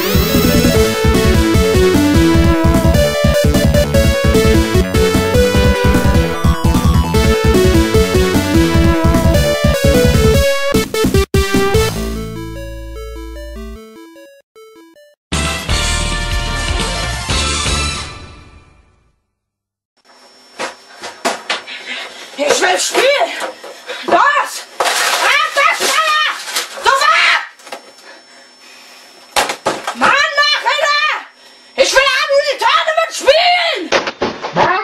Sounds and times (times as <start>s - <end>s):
Speech: 22.4s - 23.4s, 24.1s - 27.5s, 30.0s - 33.9s, 34.5s - 34.8s.